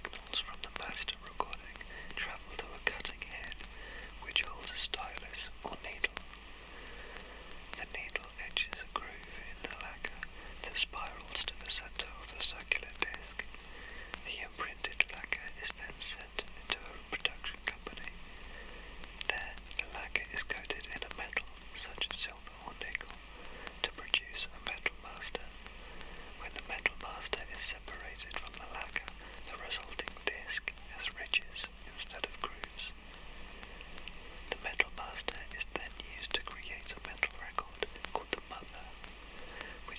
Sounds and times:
Speech: 0.0 - 6.2, 26.4 - 33.0.

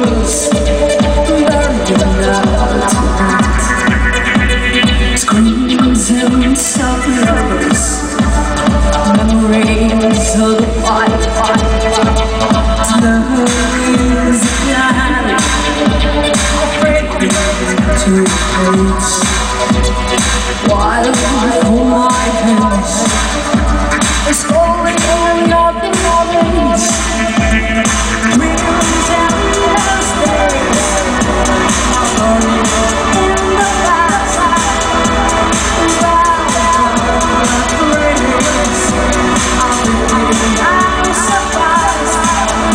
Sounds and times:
Music: 0.0 - 42.7.

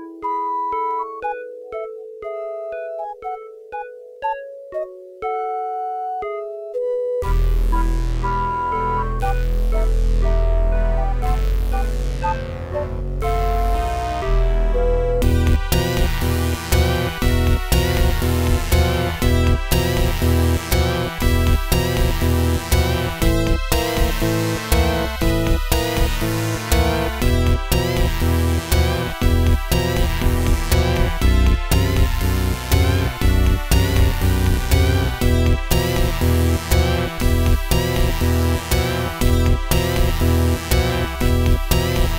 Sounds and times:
Music: 0.0 - 42.1.

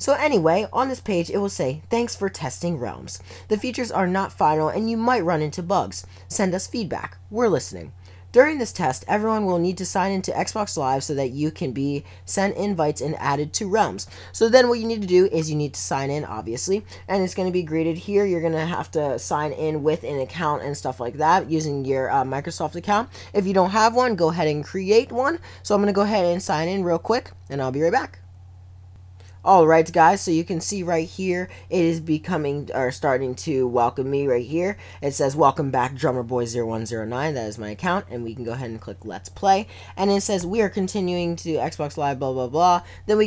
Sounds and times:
Speech: 0.0 - 28.2, 29.4 - 43.2.

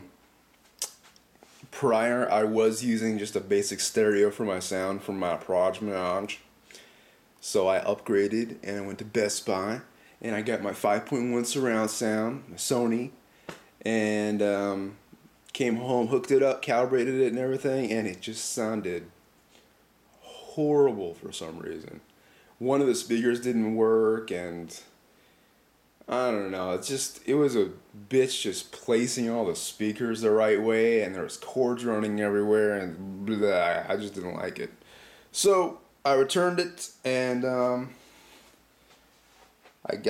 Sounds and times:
Speech: 1.6 - 6.5, 7.4 - 13.2, 13.8 - 19.2, 20.2 - 25.0, 26.0 - 38.0, 39.8 - 40.0.

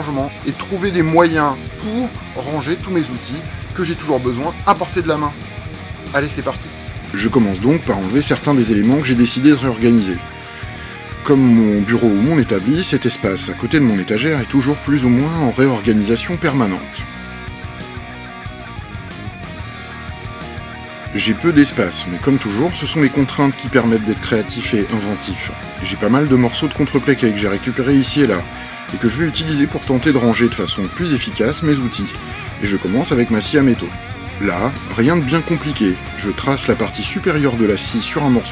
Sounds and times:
Speech: 0.0 - 5.4, 6.1 - 10.2, 11.2 - 17.0, 21.1 - 38.5
Music: 0.0 - 38.5.

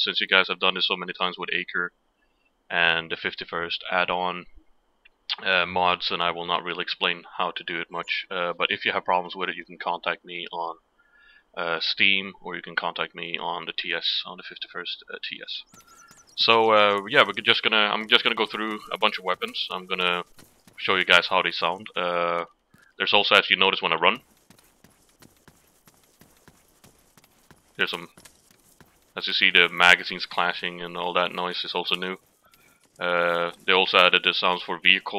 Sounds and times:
Speech: 0.0 - 1.9, 2.7 - 4.5, 5.3 - 10.8, 11.6 - 15.7, 16.4 - 20.2, 20.8 - 24.2, 27.8 - 28.1, 29.2 - 32.2, 33.0 - 35.1.

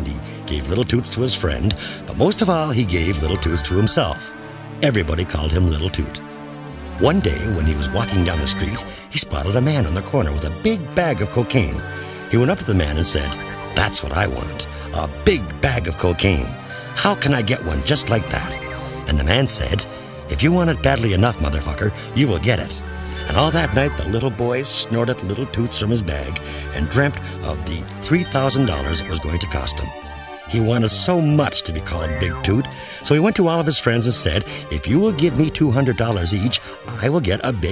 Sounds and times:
Speech: 0.0 - 6.2, 7.0 - 37.7
Music: 0.0 - 37.7.

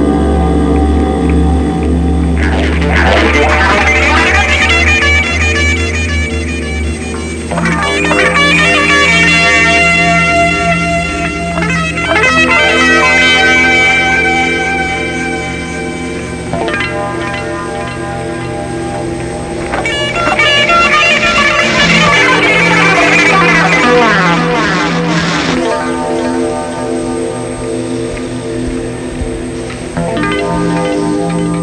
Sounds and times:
Soundtrack music: 0.0 - 31.6
Theme music: 0.0 - 31.6.

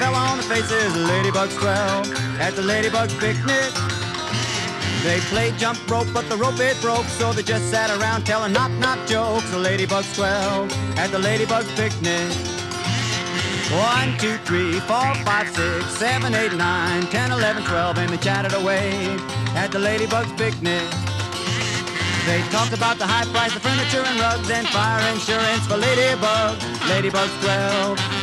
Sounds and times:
Music: 0.0 - 28.2.

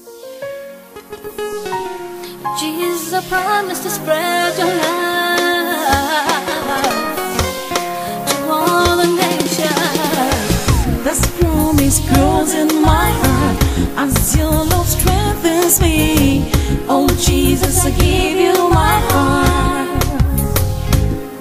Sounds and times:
Gospel music: 1.0 - 21.4.

